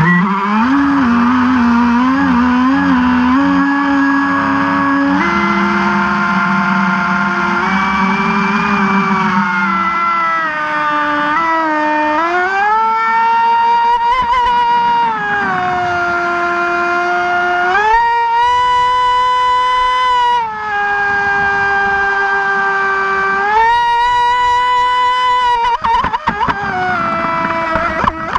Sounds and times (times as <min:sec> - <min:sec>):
Boat, Water vehicle: 0:00.0 - 0:11.8, 0:12.4 - 0:17.4, 0:18.0 - 0:28.3.